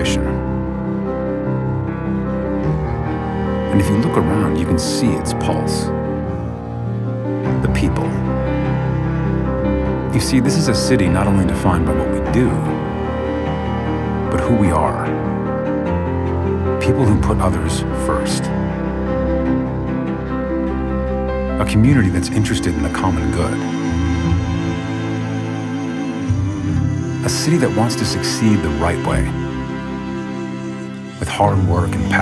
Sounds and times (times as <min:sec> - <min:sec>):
Speech: 0:00.0 - 0:00.4, 0:03.7 - 0:05.9, 0:07.6 - 0:08.3, 0:10.1 - 0:12.8, 0:14.3 - 0:15.2, 0:16.8 - 0:18.6, 0:21.6 - 0:23.6, 0:27.2 - 0:29.4, 0:31.2 - 0:32.2
Music: 0:00.0 - 0:32.2.